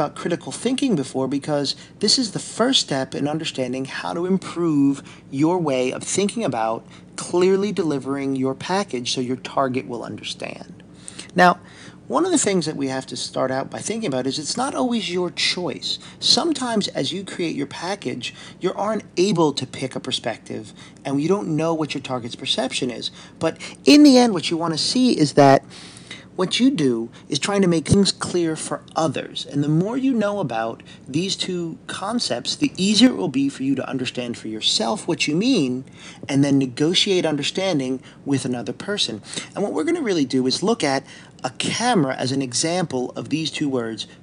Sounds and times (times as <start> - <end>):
Speech: 0.0 - 25.7, 26.3 - 44.2.